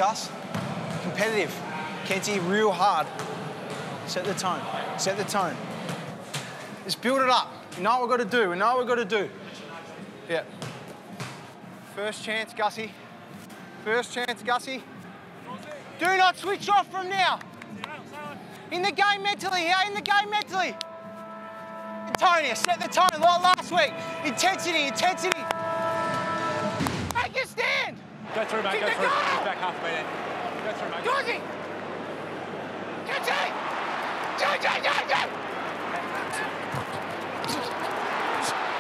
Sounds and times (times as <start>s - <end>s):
Music: 9.0s - 28.8s.